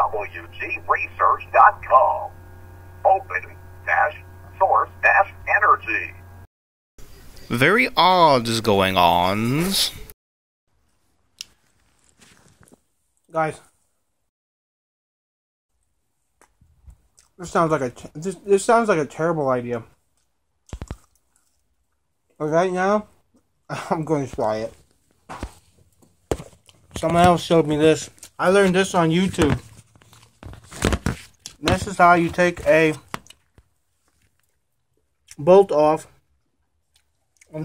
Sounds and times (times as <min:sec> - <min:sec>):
Speech: 0:00.0 - 0:02.3, 0:03.0 - 0:06.2, 0:07.5 - 0:10.1, 0:13.3 - 0:13.7, 0:17.4 - 0:19.9, 0:22.4 - 0:23.1, 0:23.7 - 0:24.8, 0:27.0 - 0:29.6, 0:31.6 - 0:33.1, 0:35.3 - 0:36.2.